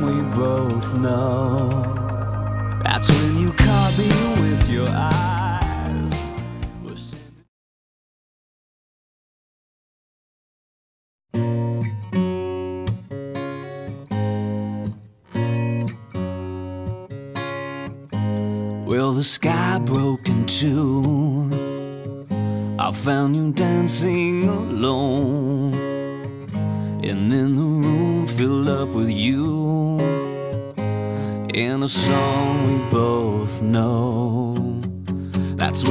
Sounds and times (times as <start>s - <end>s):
Music: 0.0s - 7.5s, 11.3s - 35.9s.